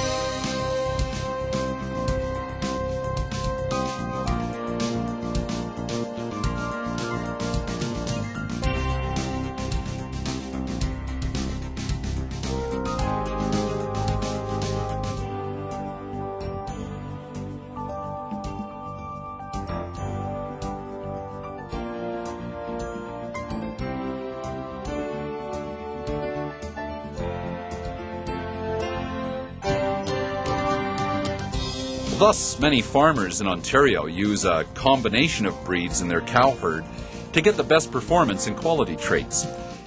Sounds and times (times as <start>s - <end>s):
Music: 0.0s - 39.8s
Speech: 32.1s - 39.6s.